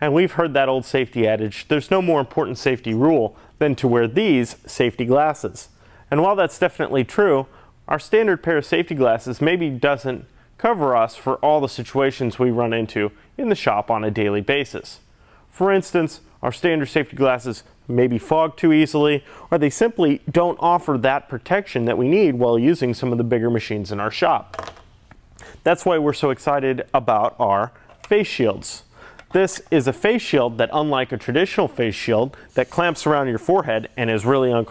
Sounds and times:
Speech: 0:00.0 - 0:24.5, 0:25.6 - 0:34.7.

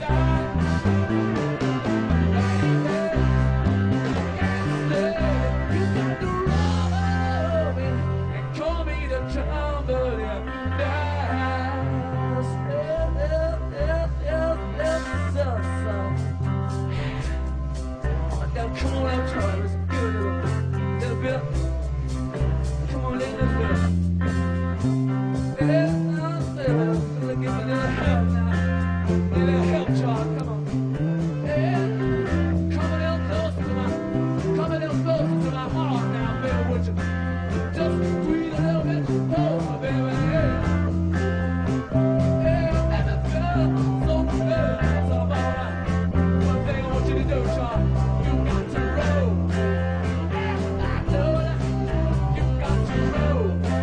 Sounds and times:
Bass guitar: 0:00.0 - 0:53.8
Country: 0:00.0 - 0:53.8.

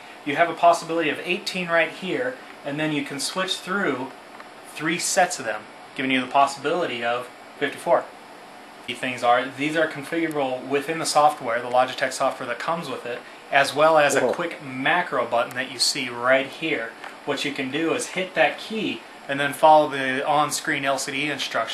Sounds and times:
Speech: 0:00.2 - 0:08.1, 0:08.9 - 0:21.7.

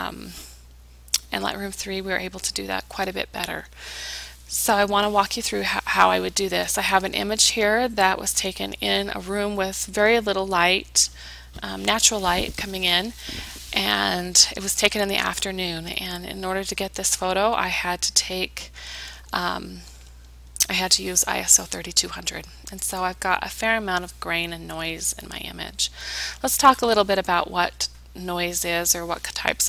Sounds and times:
Speech: 0:00.0 - 0:00.4, 0:01.2 - 0:03.7, 0:04.5 - 0:18.7, 0:19.4 - 0:19.8, 0:20.6 - 0:29.6.

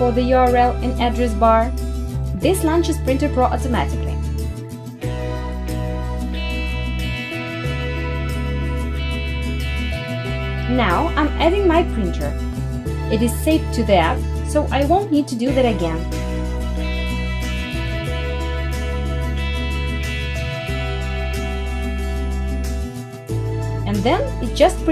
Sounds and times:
Speech: 0:00.0 - 0:01.7, 0:02.4 - 0:04.2, 0:10.7 - 0:12.4, 0:13.1 - 0:16.0, 0:23.9 - 0:24.9
Music: 0:00.0 - 0:24.9.

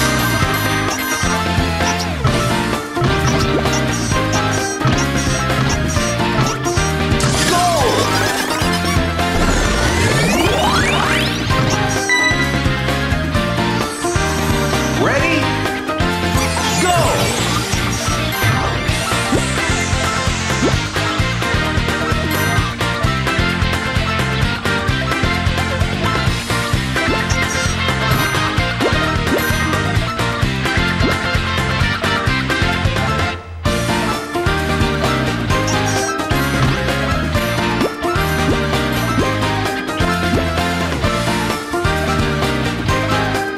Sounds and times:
Music: 0:00.0 - 0:43.5
Speech: 0:07.4 - 0:08.2, 0:15.0 - 0:15.6, 0:16.6 - 0:17.4.

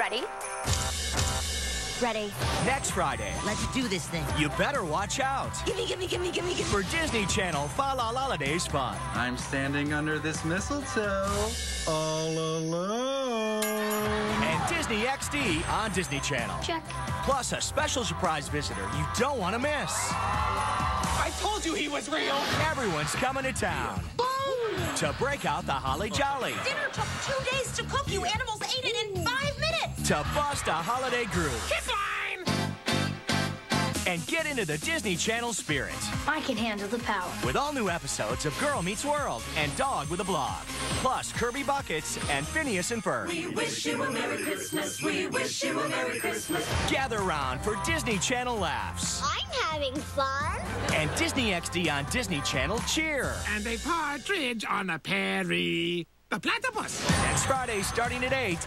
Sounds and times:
Music: 0:00.0 - 0:54.5, 0:56.8 - 0:58.6.

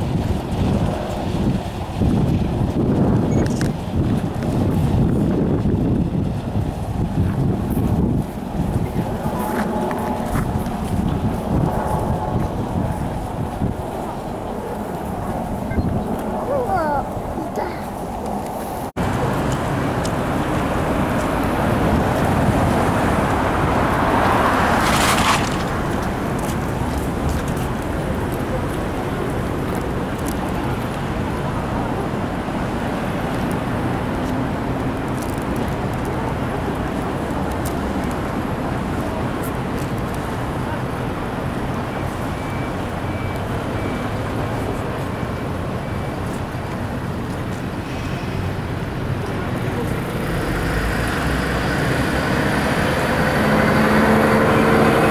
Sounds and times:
Outside, urban or manmade: 0:00.0 - 0:55.1.

